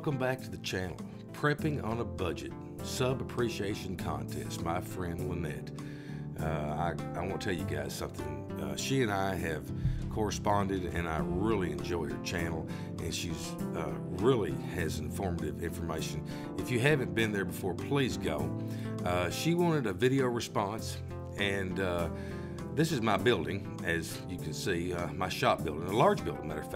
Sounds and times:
Speech: 0.0 - 5.7, 6.4 - 22.1, 22.8 - 26.7
Music: 0.0 - 26.7.

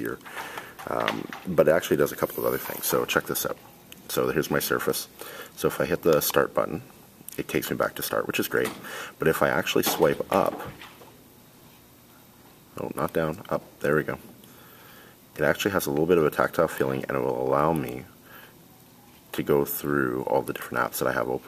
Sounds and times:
Speech: 0.0 - 0.2, 0.9 - 10.8, 12.8 - 14.2, 15.4 - 18.1, 19.3 - 21.4.

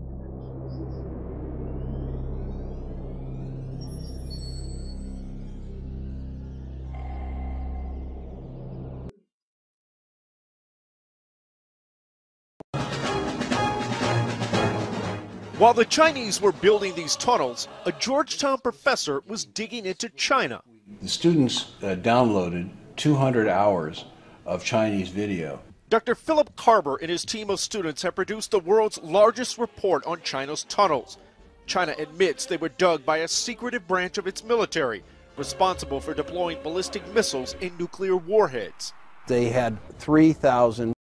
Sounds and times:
Speech: 15.6 - 41.0.

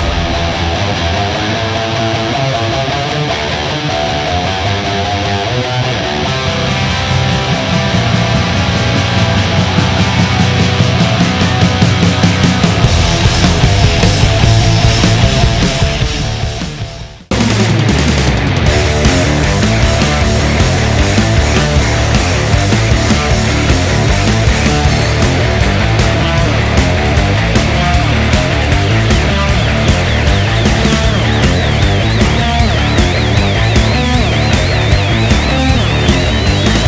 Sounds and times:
Electric guitar: 0.0 - 36.8.

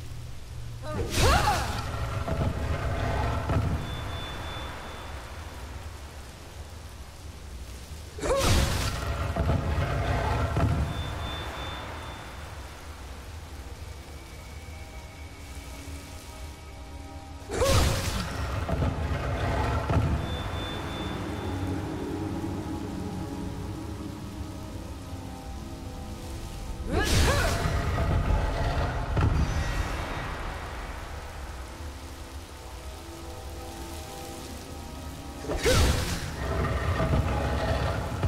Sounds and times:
Music: 0.0 - 38.2.

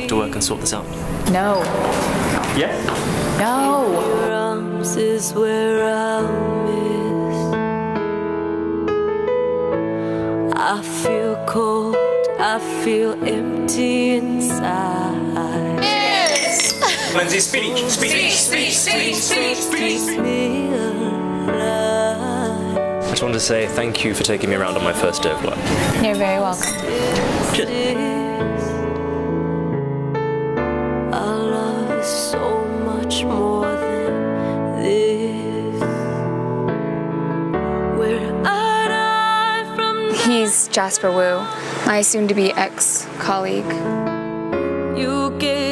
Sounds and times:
Music: 0.0 - 45.7.

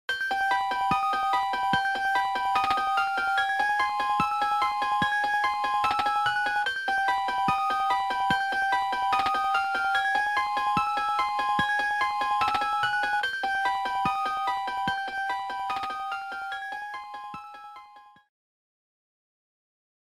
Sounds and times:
Jingle (music): 0.1 - 18.2.

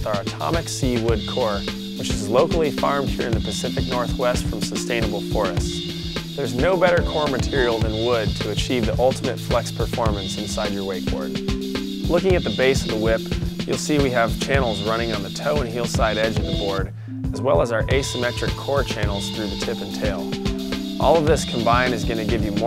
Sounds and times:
Speech: 0.0 - 5.8, 6.4 - 11.4, 12.1 - 20.3, 21.0 - 22.6
Music: 0.0 - 22.6.

